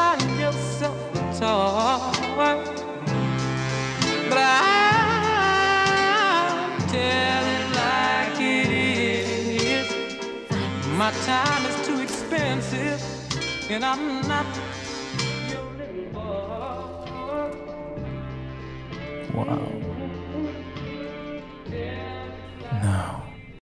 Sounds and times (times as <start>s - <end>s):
Music: 0.0s - 23.6s
Speech: 19.2s - 20.0s, 22.7s - 23.5s.